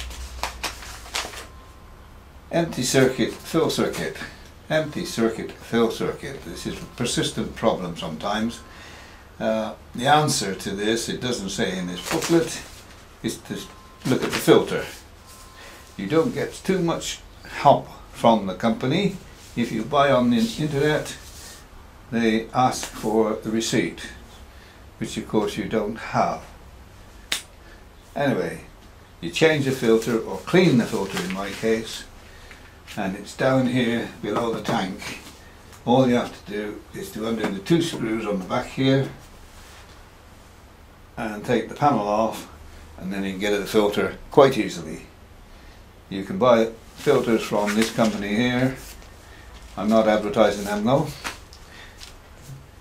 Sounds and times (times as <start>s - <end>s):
Speech: 2.5s - 8.6s, 9.4s - 15.0s, 16.0s - 21.3s, 22.1s - 24.3s, 25.0s - 26.5s, 28.2s - 32.1s, 32.9s - 39.2s, 41.2s - 45.2s, 46.1s - 48.9s, 49.8s - 51.3s.